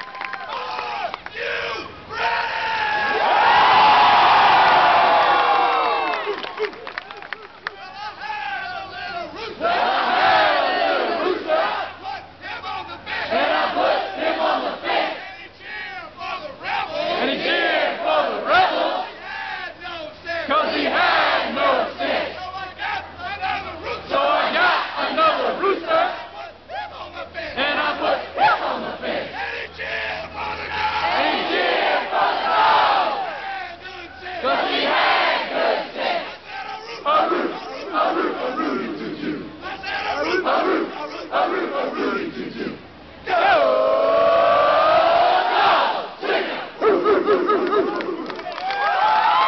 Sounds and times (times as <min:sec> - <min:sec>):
Speech: 0:25.1 - 0:28.1, 0:36.6 - 0:42.4.